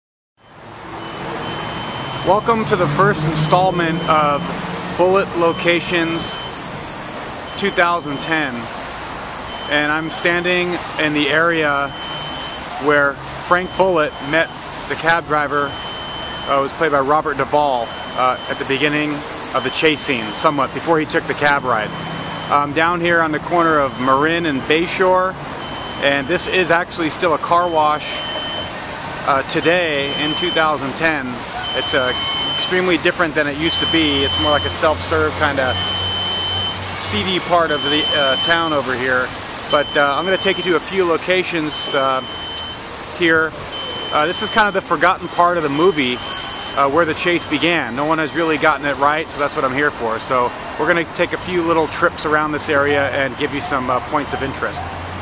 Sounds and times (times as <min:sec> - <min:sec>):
Car: 0:00.4 - 0:55.2
Speech: 0:02.2 - 0:06.4, 0:07.6 - 0:08.7, 0:09.7 - 0:12.0, 0:12.8 - 0:15.7, 0:16.5 - 0:21.9, 0:22.5 - 0:25.4, 0:26.0 - 0:28.2, 0:29.2 - 0:35.8, 0:37.0 - 0:42.2, 0:43.2 - 0:46.2, 0:46.8 - 0:54.9.